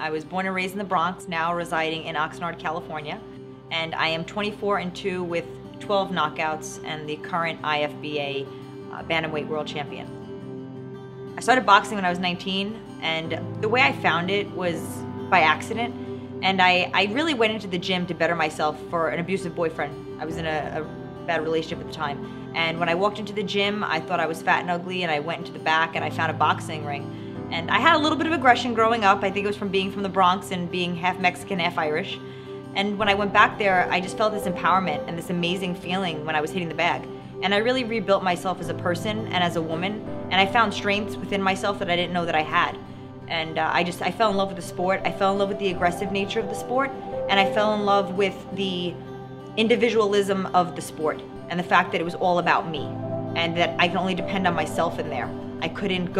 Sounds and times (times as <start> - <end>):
Speech: 0.0 - 10.0, 11.4 - 32.2, 32.8 - 49.0, 49.6 - 56.1
Music: 0.0 - 56.1.